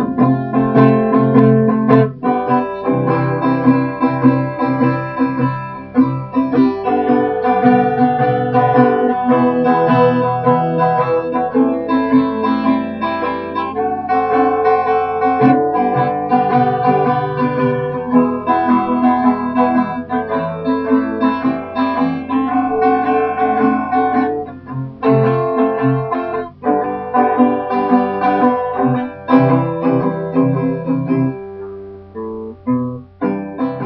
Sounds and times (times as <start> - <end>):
Guitar: 0.0 - 33.8.